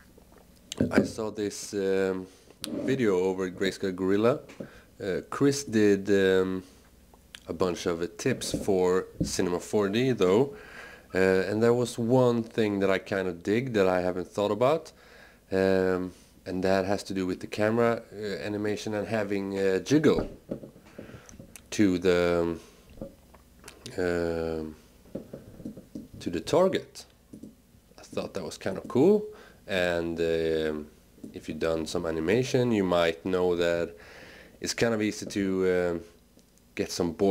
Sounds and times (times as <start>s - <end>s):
Speech: 0.8s - 6.7s, 7.4s - 20.3s, 21.7s - 22.6s, 23.8s - 24.8s, 26.2s - 27.1s, 28.0s - 34.0s, 34.6s - 36.2s, 36.8s - 37.3s.